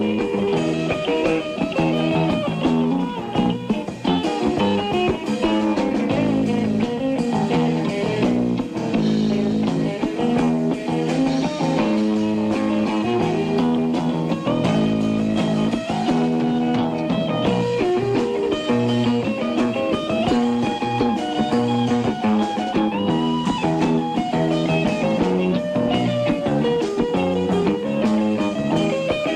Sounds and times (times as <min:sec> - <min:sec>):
Blues: 0:00.0 - 0:29.3.